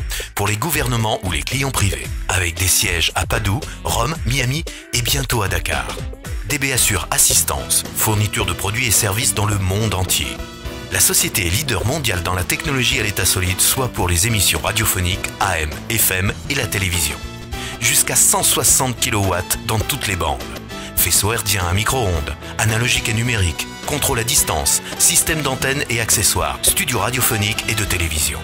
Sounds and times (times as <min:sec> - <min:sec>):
Speech: 0:00.0 - 0:17.2, 0:17.8 - 0:28.4
Music: 0:00.0 - 0:28.4.